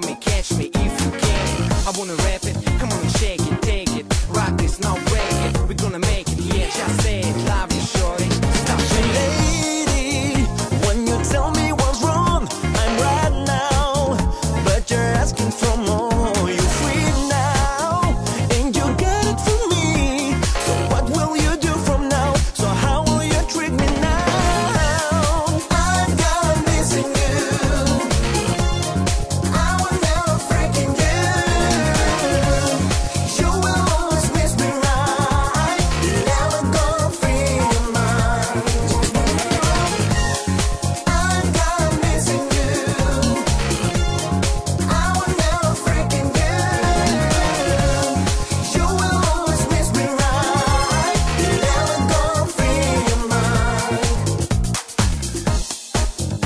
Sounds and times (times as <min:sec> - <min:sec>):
Pop music: 0:00.0 - 0:56.4.